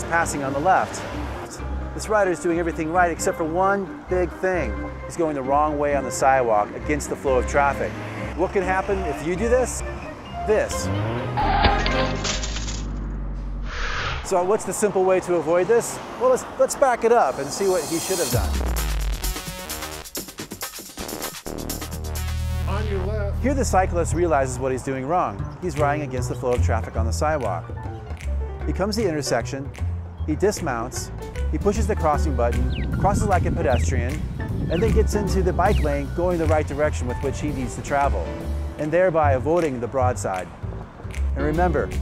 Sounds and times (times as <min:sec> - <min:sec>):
Music: 0:00.0 - 0:12.2, 0:17.4 - 0:42.0
Speech: 0:14.3 - 0:18.5, 0:22.7 - 0:27.6, 0:28.7 - 0:29.7, 0:30.3 - 0:40.5, 0:41.4 - 0:41.9.